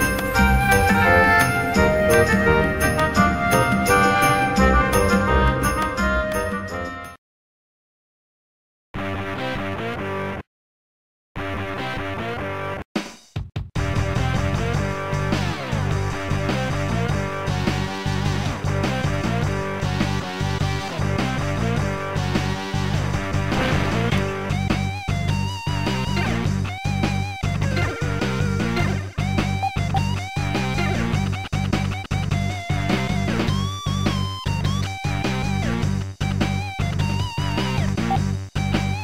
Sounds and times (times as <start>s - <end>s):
Rock and roll: 0.0s - 7.1s, 13.8s - 39.0s.